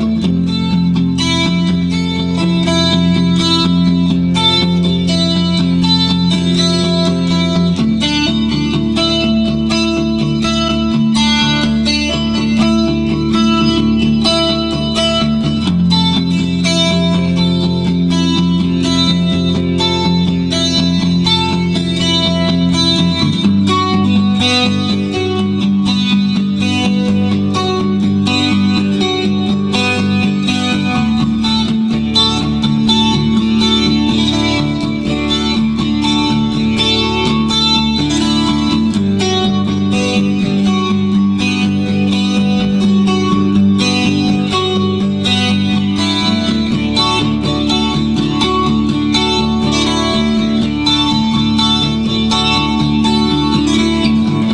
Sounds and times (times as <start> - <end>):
Guitar: 0.0 - 54.5.